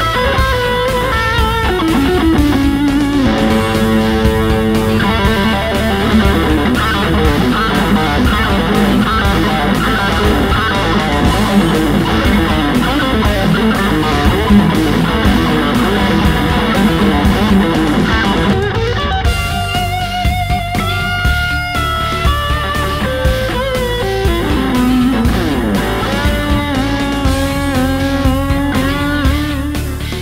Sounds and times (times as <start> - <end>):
Bass guitar: 0.0 - 30.2
Electric guitar: 0.0 - 30.2.